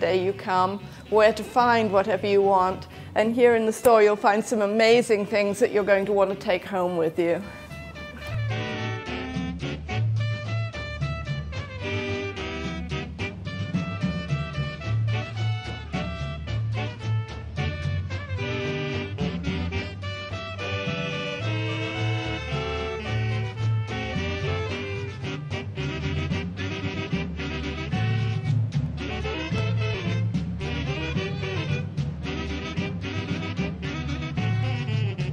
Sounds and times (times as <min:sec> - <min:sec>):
Swing music: 0:00.0 - 0:35.3.